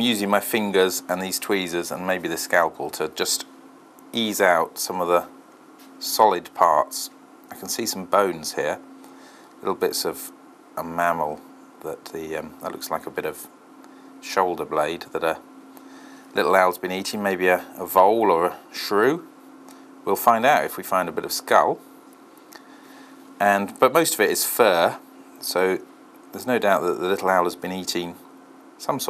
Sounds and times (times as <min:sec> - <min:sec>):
Speech: 0:00.0 - 0:03.5, 0:04.1 - 0:05.3, 0:06.0 - 0:08.8, 0:09.6 - 0:13.5, 0:14.2 - 0:15.4, 0:16.4 - 0:19.3, 0:20.0 - 0:21.8, 0:23.4 - 0:28.2, 0:28.8 - 0:29.1
Inside, small room: 0:00.0 - 0:29.1.